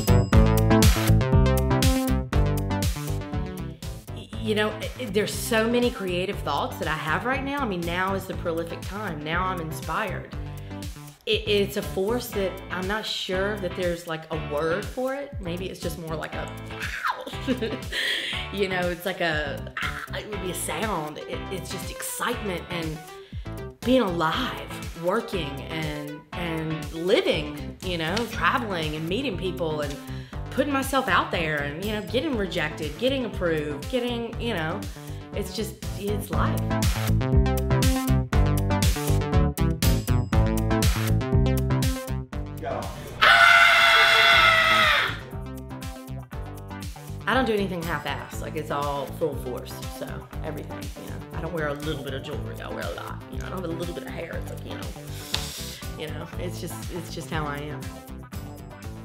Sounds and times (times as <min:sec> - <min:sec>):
Music: 0:00.0 - 0:59.0
Speech: 0:04.2 - 0:10.3, 0:11.3 - 0:16.5, 0:18.5 - 0:23.0, 0:23.8 - 0:30.0, 0:30.6 - 0:34.8, 0:35.4 - 0:36.6, 0:42.6 - 0:43.1, 0:47.3 - 0:55.0, 0:55.9 - 0:57.9.